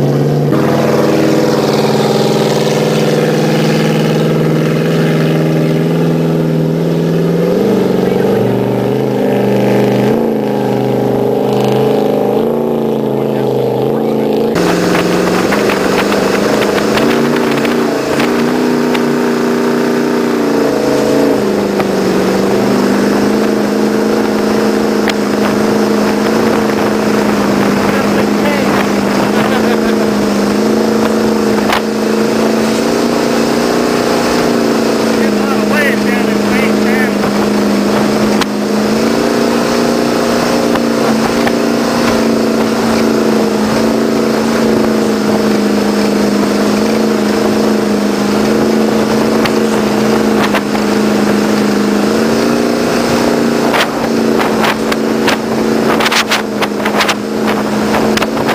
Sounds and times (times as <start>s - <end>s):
Motorboat, speedboat: 0.0s - 58.5s.